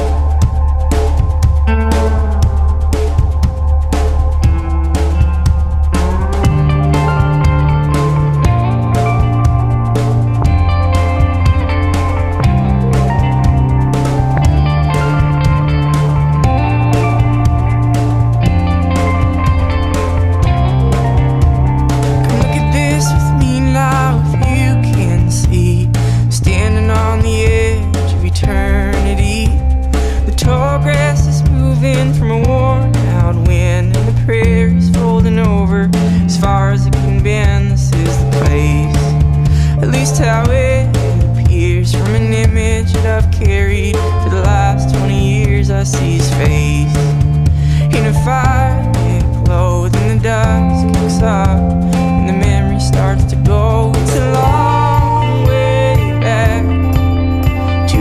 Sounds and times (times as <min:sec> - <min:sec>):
Music: 0:00.0 - 0:58.0.